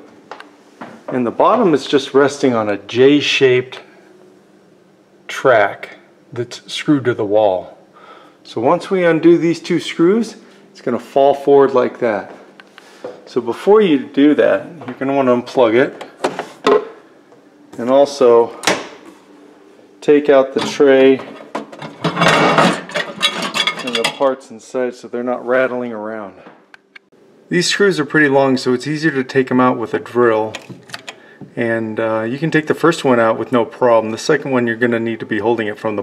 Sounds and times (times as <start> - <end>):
Speech: 1.1 - 3.9, 5.3 - 7.8, 8.5 - 12.5, 13.3 - 16.2, 17.8 - 18.6, 20.0 - 21.4, 23.8 - 26.5, 27.5 - 30.6, 31.5 - 36.0.